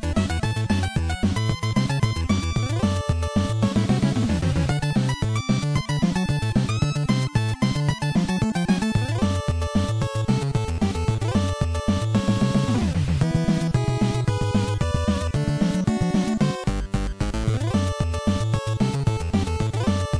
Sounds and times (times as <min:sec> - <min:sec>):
Music: 0:00.0 - 0:20.1.